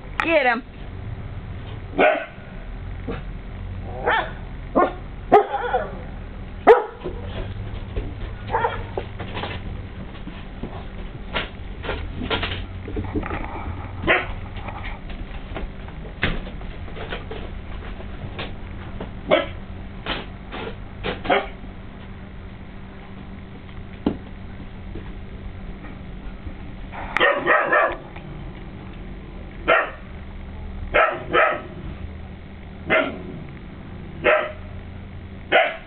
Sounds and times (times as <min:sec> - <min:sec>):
Bow-wow: 0:02.0 - 0:02.4, 0:03.9 - 0:06.0, 0:06.6 - 0:07.1, 0:08.5 - 0:08.9, 0:14.0 - 0:14.4, 0:19.3 - 0:19.6, 0:21.2 - 0:21.6, 0:27.2 - 0:28.0, 0:29.7 - 0:30.0, 0:30.9 - 0:31.8, 0:32.9 - 0:33.3, 0:34.2 - 0:34.7, 0:35.5 - 0:35.8
Yip: 0:02.0 - 0:02.4, 0:04.0 - 0:06.0, 0:06.7 - 0:07.0, 0:08.5 - 0:08.8, 0:19.3 - 0:19.6, 0:21.3 - 0:21.6, 0:27.2 - 0:28.0, 0:29.7 - 0:30.0, 0:31.0 - 0:31.7, 0:32.9 - 0:33.2, 0:34.2 - 0:34.6, 0:35.5 - 0:35.8.